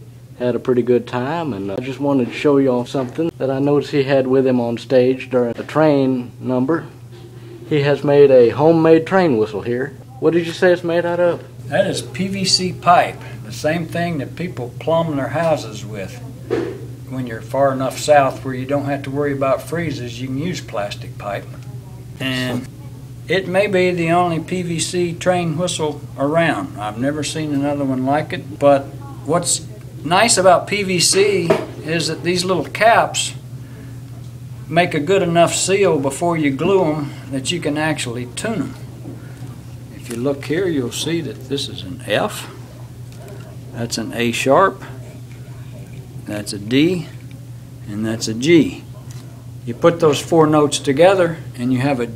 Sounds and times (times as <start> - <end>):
Speech: 0.4 - 7.0, 7.7 - 33.4, 34.7 - 38.9, 39.9 - 42.7, 43.3 - 47.2, 47.9 - 52.1.